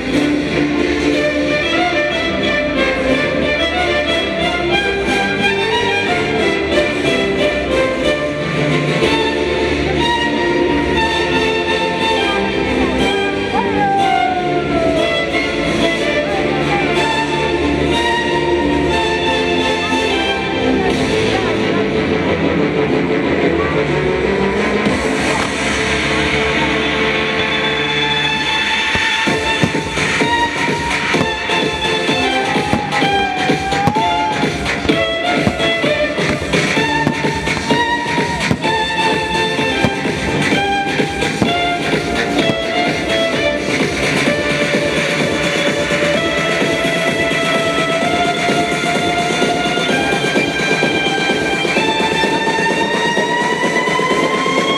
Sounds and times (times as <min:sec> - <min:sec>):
Violin, fiddle: 0:00.0 - 0:54.7.